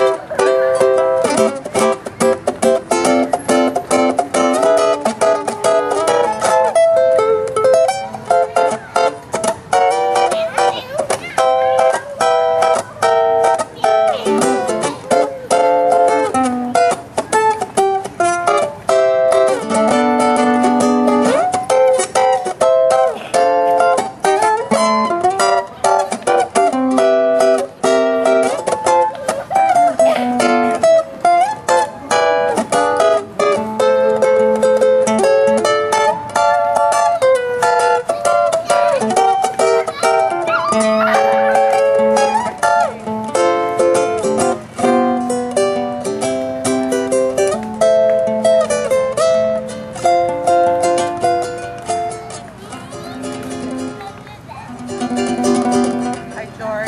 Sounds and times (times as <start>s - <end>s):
Guitar: 0.0s - 56.8s
Ukulele: 0.0s - 56.8s.